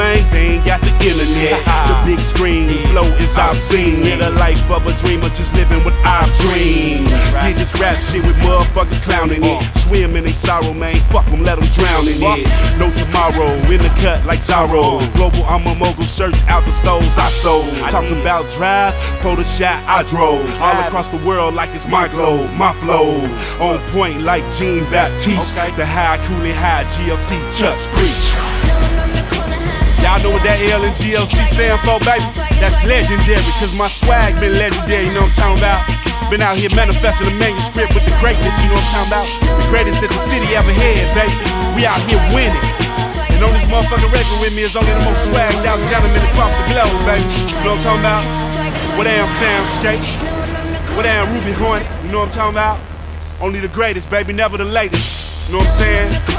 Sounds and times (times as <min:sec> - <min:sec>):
Rapping: 0:00.0 - 0:52.8, 0:53.4 - 0:56.3
Hip hop music: 0:00.0 - 0:56.3.